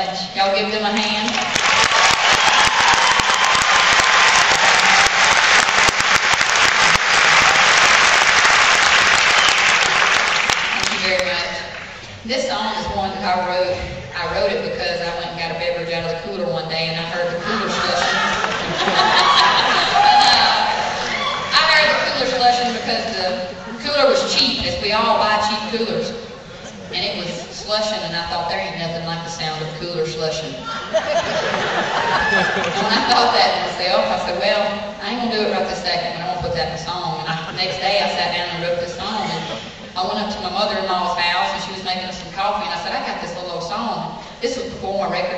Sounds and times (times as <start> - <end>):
Speech: 12.3 - 18.2, 21.5 - 30.6, 32.8 - 45.3.